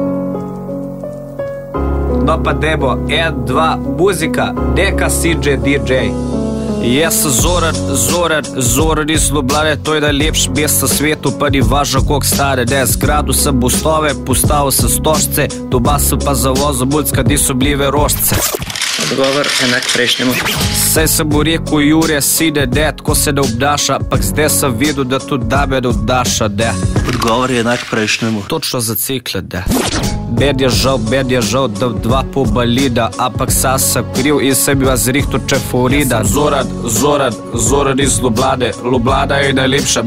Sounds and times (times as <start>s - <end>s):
Music: 0.0s - 40.0s
Speech: 2.2s - 6.2s, 6.8s - 18.4s, 19.0s - 40.0s.